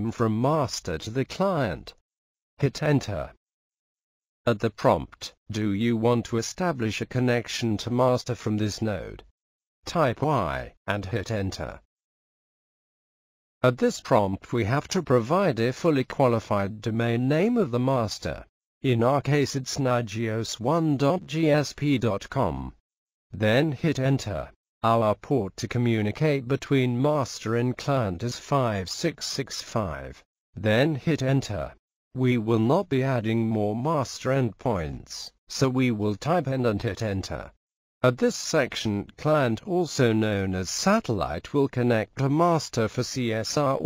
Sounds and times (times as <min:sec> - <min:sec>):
Speech: 0:00.0 - 0:02.0, 0:02.6 - 0:03.4, 0:04.5 - 0:09.3, 0:09.9 - 0:11.9, 0:13.6 - 0:22.8, 0:23.4 - 0:43.8.